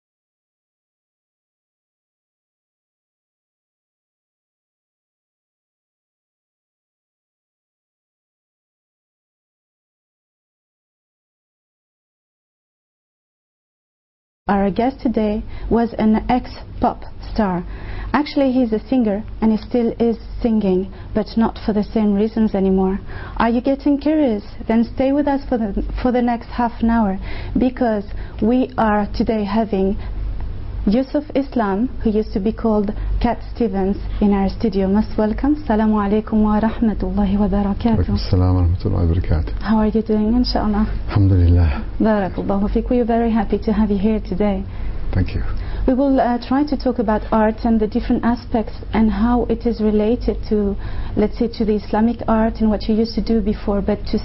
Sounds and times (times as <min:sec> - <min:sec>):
Speech: 0:14.5 - 0:30.0, 0:30.9 - 0:54.2.